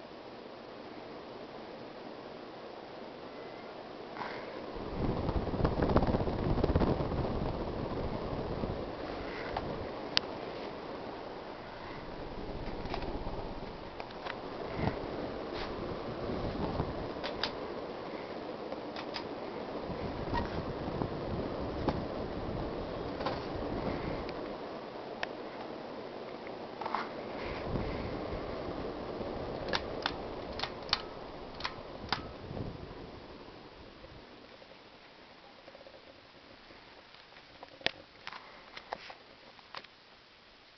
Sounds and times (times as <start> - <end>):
Mechanical fan: 0.0 - 40.7.